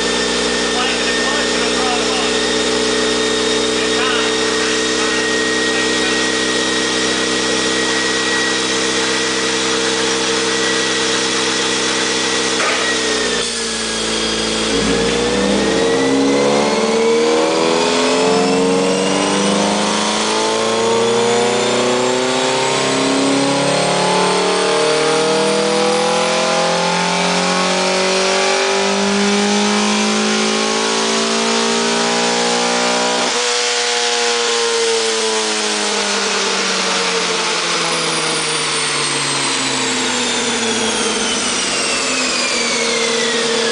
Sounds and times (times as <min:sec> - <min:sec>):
Car: 0:00.0 - 0:43.7.